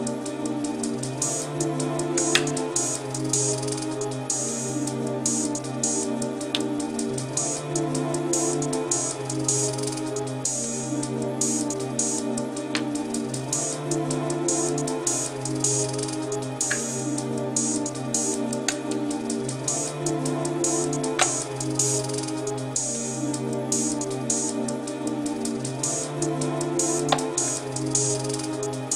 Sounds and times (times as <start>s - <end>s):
Music: 0.0s - 28.9s.